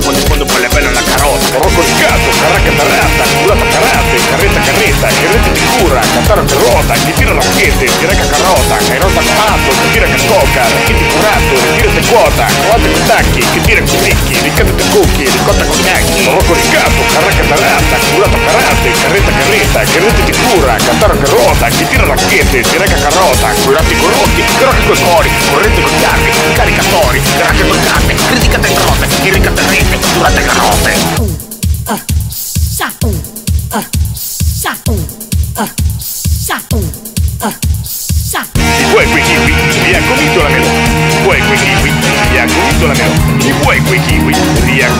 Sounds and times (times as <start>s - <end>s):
Exciting music: 0.0s - 36.0s, 38.5s - 44.9s
Disco: 0.0s - 44.9s.